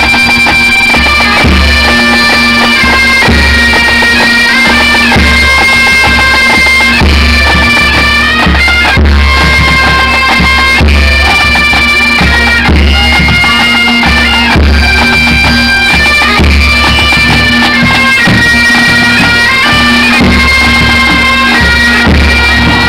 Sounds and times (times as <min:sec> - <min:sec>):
Bagpipes: 0:00.0 - 0:22.8.